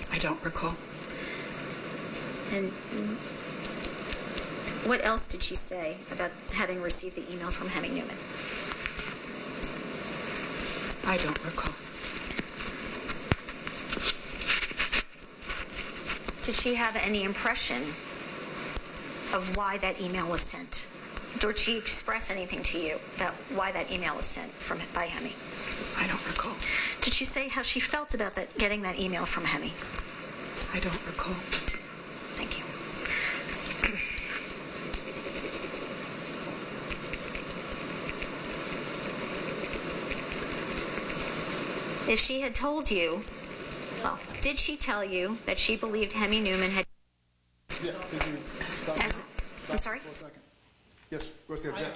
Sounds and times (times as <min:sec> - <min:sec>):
Speech: 0:02.5 - 0:03.2, 0:11.0 - 0:11.8, 0:21.4 - 0:25.4, 0:26.0 - 0:29.8, 0:42.1 - 0:43.2, 0:47.8 - 0:50.5, 0:51.2 - 0:51.9.